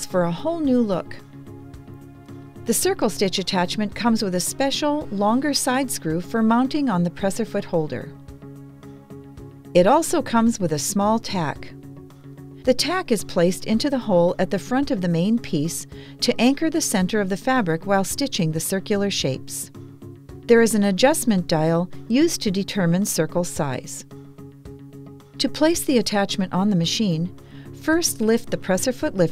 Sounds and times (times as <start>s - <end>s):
Speech: 0.0s - 1.2s, 2.7s - 8.1s, 9.8s - 11.8s, 12.7s - 19.7s, 20.5s - 24.0s, 25.4s - 29.3s
Music: 0.0s - 29.3s.